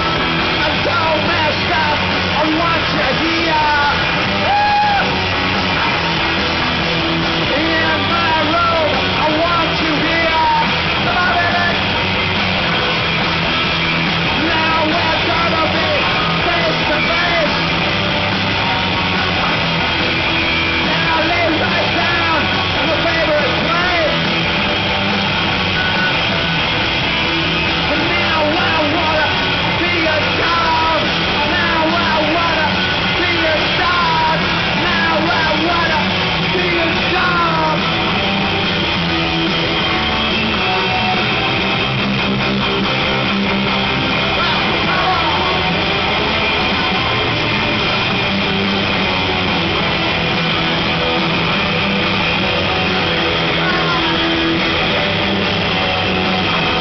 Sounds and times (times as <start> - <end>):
Music: 0.0 - 56.8.